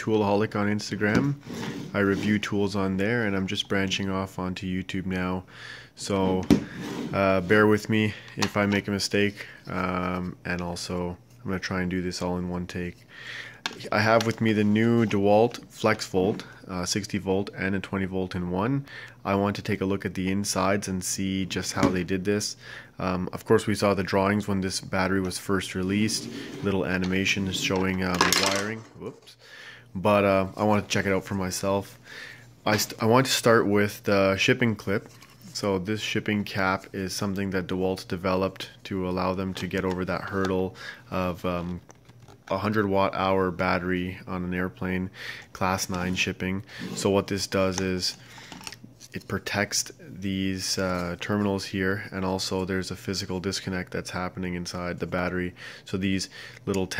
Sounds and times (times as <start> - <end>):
Speech: 0.0 - 13.0, 13.7 - 32.0, 32.6 - 41.8, 42.5 - 48.2, 49.1 - 56.9.